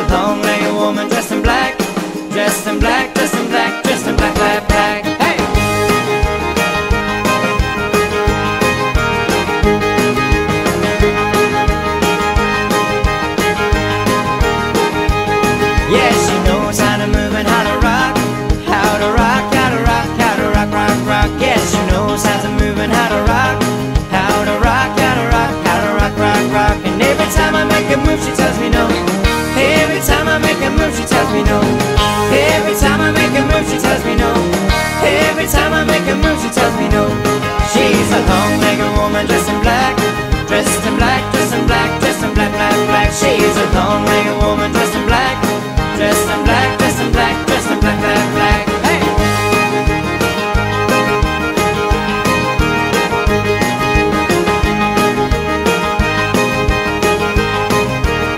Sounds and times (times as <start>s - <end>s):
Music: 0.0s - 58.3s.